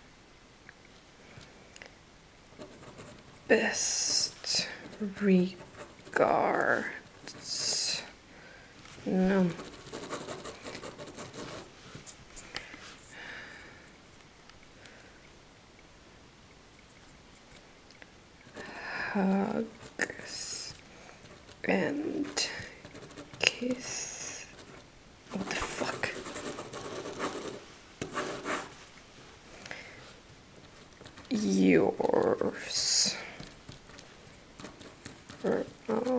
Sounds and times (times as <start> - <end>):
Inside, small room: 0.0 - 36.1
Speech: 3.5 - 5.6, 6.2 - 8.2, 9.0 - 9.6, 19.1 - 20.8, 21.6 - 22.7, 23.4 - 24.5, 25.3 - 26.2, 31.3 - 33.4, 35.4 - 36.1.